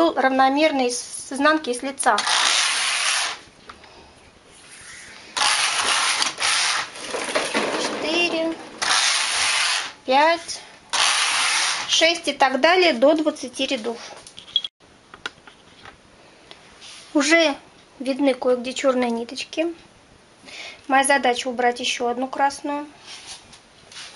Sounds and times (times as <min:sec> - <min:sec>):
Speech: 0:00.0 - 0:02.2, 0:07.8 - 0:08.6, 0:10.1 - 0:10.6, 0:11.9 - 0:14.1, 0:17.1 - 0:19.8, 0:20.9 - 0:22.9.